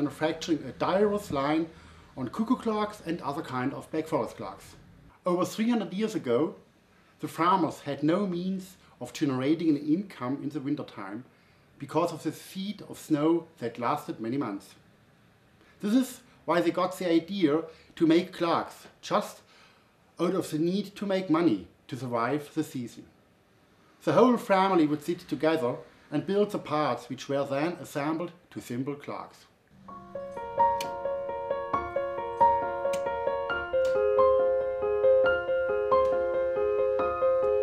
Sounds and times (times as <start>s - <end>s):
Speech: 0.0s - 6.6s, 7.2s - 14.8s, 15.8s - 19.5s, 20.2s - 23.1s, 24.0s - 29.6s.